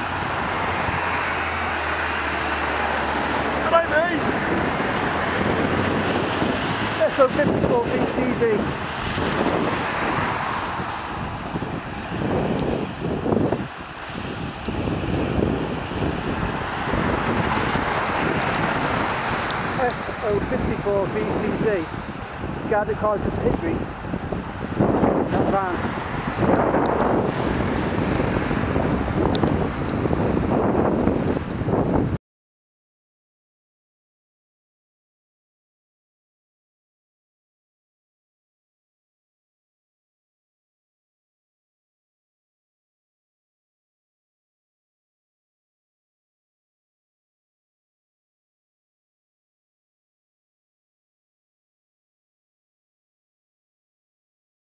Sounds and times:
Vehicle: 0:00.0 - 0:32.2
Speech: 0:03.6 - 0:04.3, 0:07.0 - 0:08.7, 0:19.8 - 0:21.9, 0:22.7 - 0:23.8, 0:25.3 - 0:25.8.

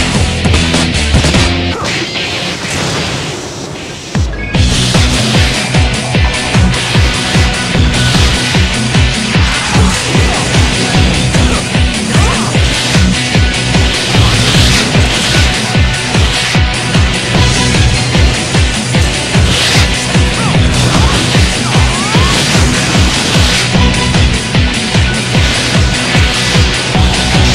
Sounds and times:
Music: 0:00.0 - 0:27.5.

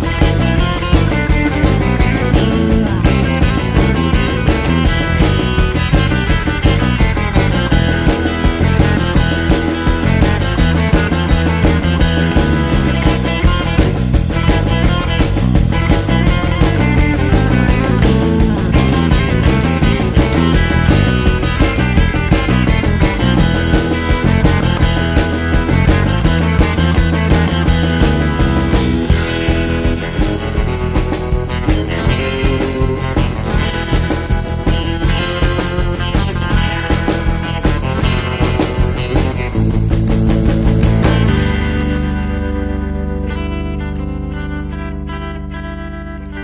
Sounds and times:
Psychedelic rock: 0:00.0 - 0:46.4.

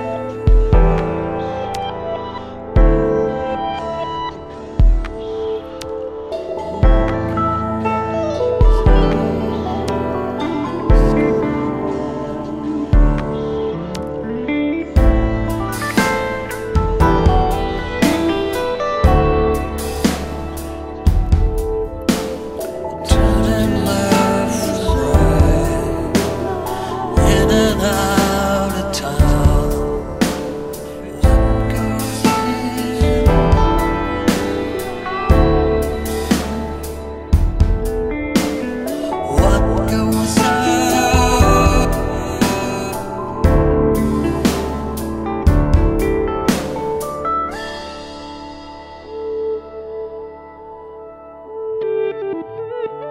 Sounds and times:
Steel guitar, slide guitar: 0:00.0 - 0:53.1.

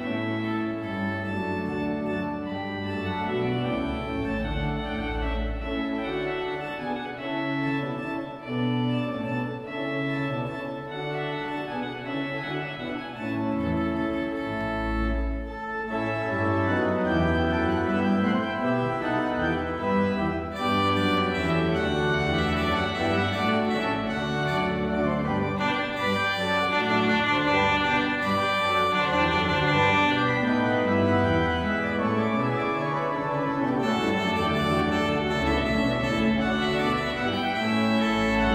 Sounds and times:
Organ: 0:00.0 - 0:38.5.

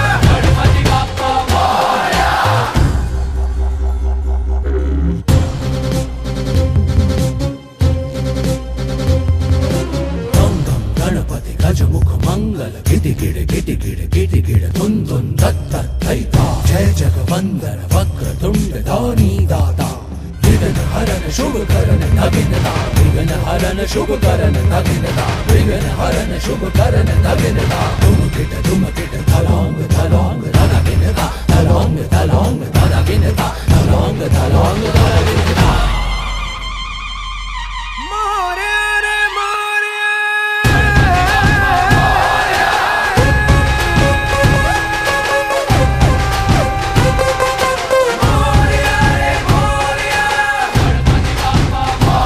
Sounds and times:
Theme music: 0:00.0 - 0:12.5, 0:15.4 - 0:39.6, 0:40.6 - 0:52.2.

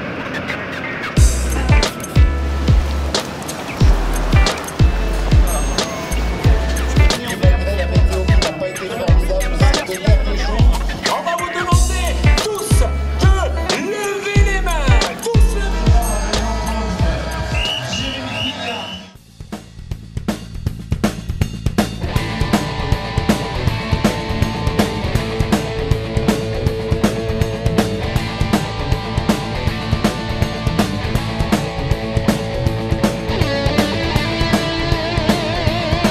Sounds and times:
Music: 0:01.2 - 0:36.1.

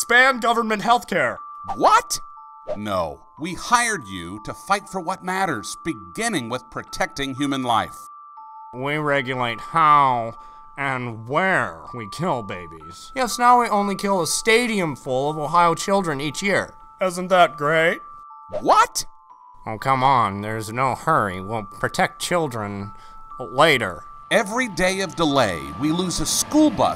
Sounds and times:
Music: 0:00.0 - 0:26.9
Speech: 0:19.7 - 0:26.9.

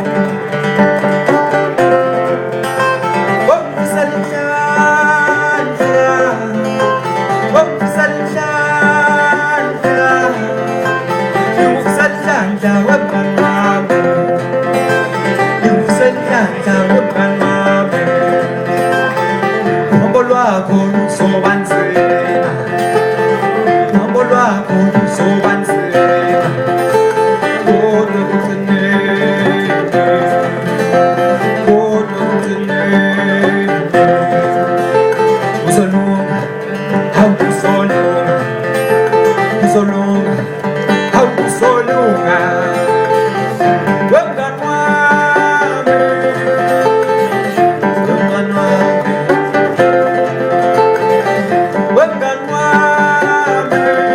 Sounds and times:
Country: 0:00.0 - 0:54.1.

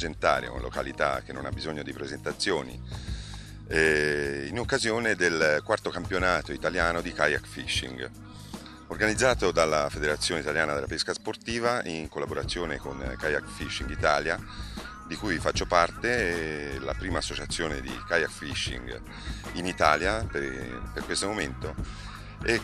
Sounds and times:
Speech: 0:00.0 - 0:02.8, 0:03.7 - 0:08.1, 0:08.9 - 0:14.4, 0:15.1 - 0:19.0, 0:19.6 - 0:21.8, 0:22.4 - 0:22.6
Music: 0:00.0 - 0:22.6.

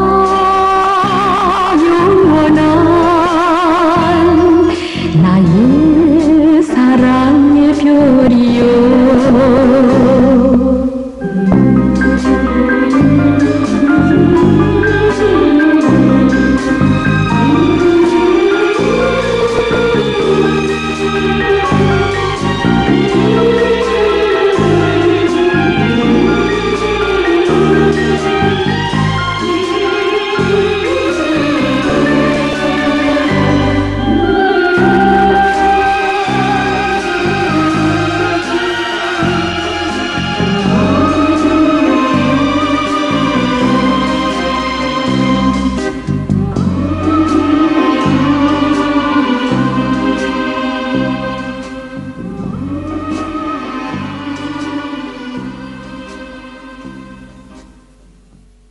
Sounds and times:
Soundtrack music: 0:00.0 - 0:57.9
Blues: 0:00.0 - 0:58.6.

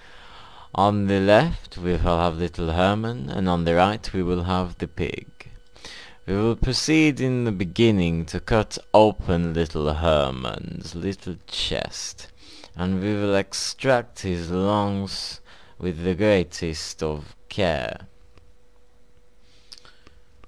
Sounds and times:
Speech: 0:00.8 - 0:05.6, 0:06.2 - 0:18.1.

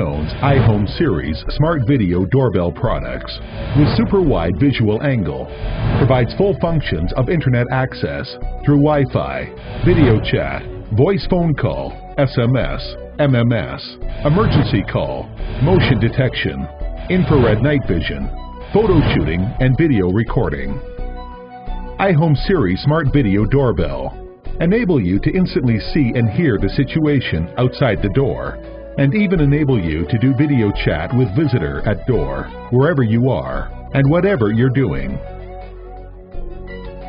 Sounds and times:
Speech: 0:00.0 - 0:20.8, 0:22.0 - 0:35.2
Music: 0:00.0 - 0:37.0.

